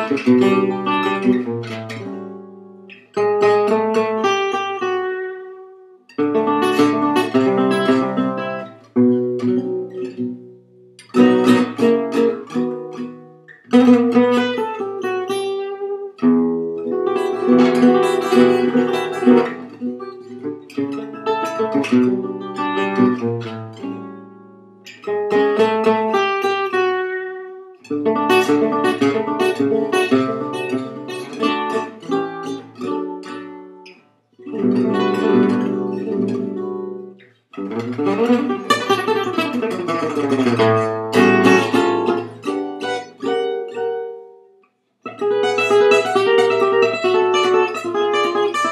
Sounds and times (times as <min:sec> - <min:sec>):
Guitar: 0:00.0 - 0:48.7.